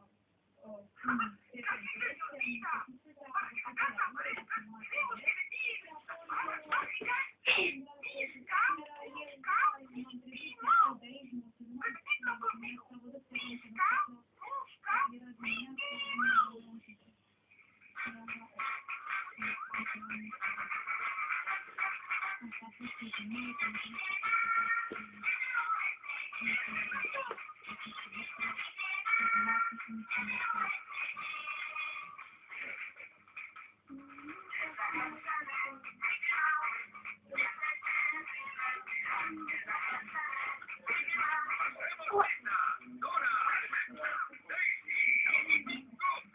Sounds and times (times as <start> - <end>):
Speech: 0.6 - 17.1, 18.0 - 20.8, 21.9 - 31.5, 33.9 - 46.3
Music: 23.0 - 36.0.